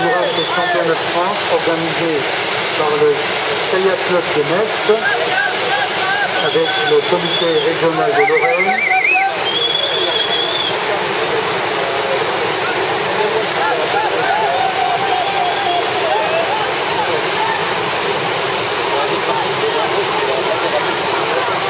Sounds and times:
Speech: 0.0 - 17.7, 18.9 - 21.7
Boat, Water vehicle: 0.0 - 21.7.

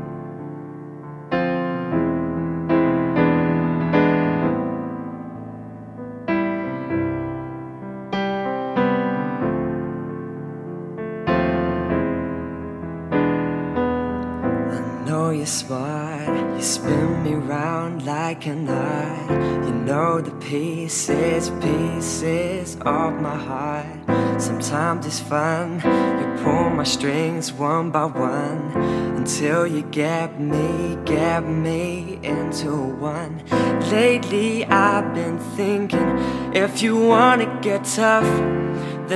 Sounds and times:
Music: 0.0 - 39.1.

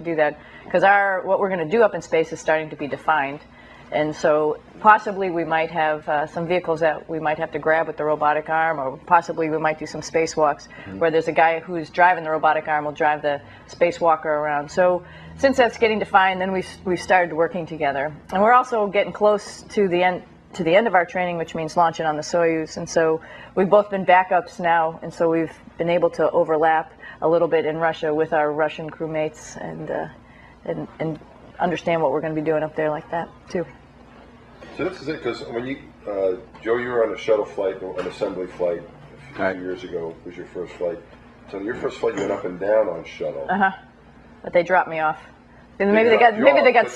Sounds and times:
Inside, small room: 0.0 - 46.9.

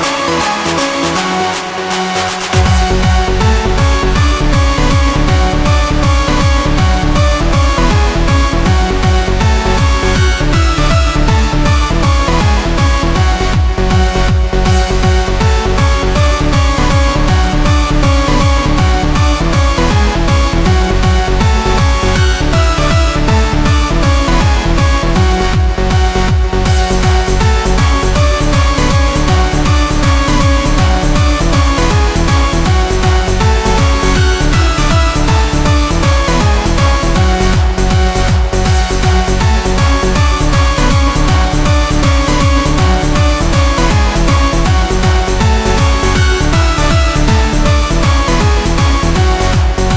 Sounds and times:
Techno: 0.0 - 49.9.

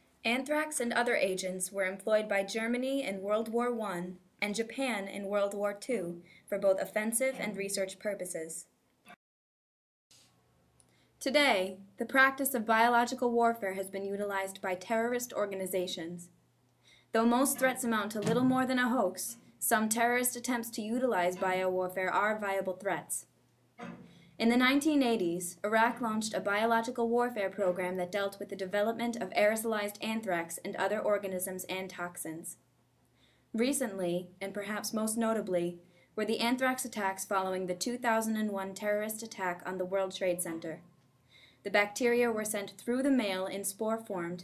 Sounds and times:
Speech: 0.3 - 8.7, 11.2 - 16.4, 17.2 - 23.3, 24.4 - 32.6, 33.6 - 40.8, 41.7 - 44.4.

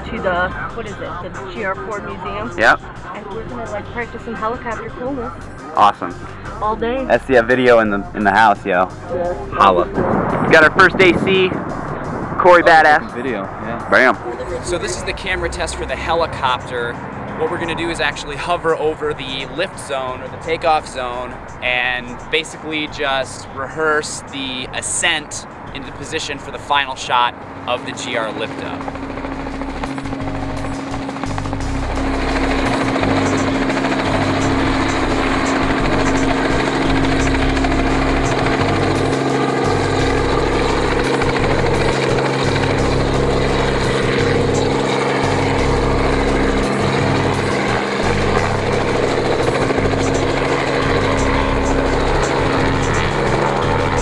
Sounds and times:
Speech: 0.0 - 11.6, 12.4 - 28.8, 34.4 - 37.3, 49.8 - 53.3
Helicopter: 14.2 - 18.8, 19.5 - 22.8, 25.3 - 54.0.

